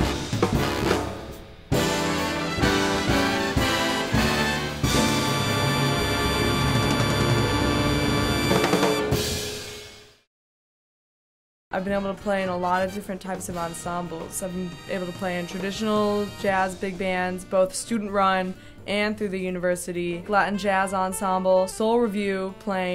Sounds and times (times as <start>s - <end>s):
Jazz: 0.0s - 9.5s
Speech: 11.8s - 22.9s.